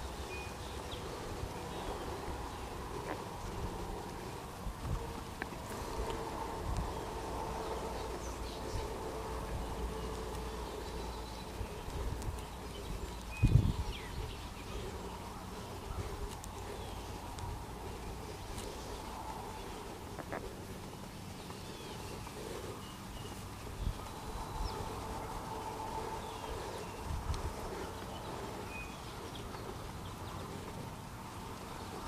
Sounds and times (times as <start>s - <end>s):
Bird: 0.0s - 32.0s.